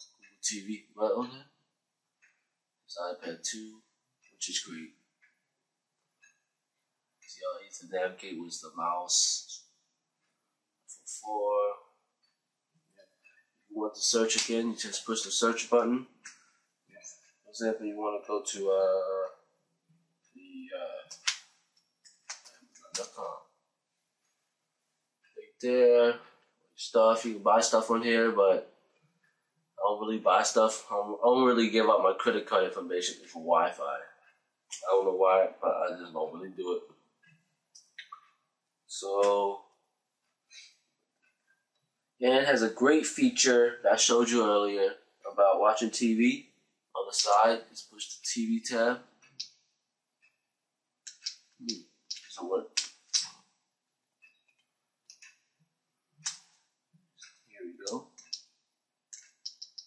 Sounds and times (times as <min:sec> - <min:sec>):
Speech: 0:00.0 - 0:01.6, 0:02.9 - 0:03.8, 0:04.4 - 0:05.0, 0:07.3 - 0:09.6, 0:10.9 - 0:11.8, 0:13.7 - 0:16.2, 0:17.0 - 0:19.4, 0:20.4 - 0:21.3, 0:22.9 - 0:23.4, 0:25.4 - 0:28.8, 0:29.8 - 0:34.2, 0:34.8 - 0:36.9, 0:38.9 - 0:39.6, 0:42.2 - 0:46.4, 0:47.0 - 0:49.1, 0:51.1 - 0:53.3, 0:57.6 - 0:58.0
Inside, small room: 0:00.0 - 0:59.8.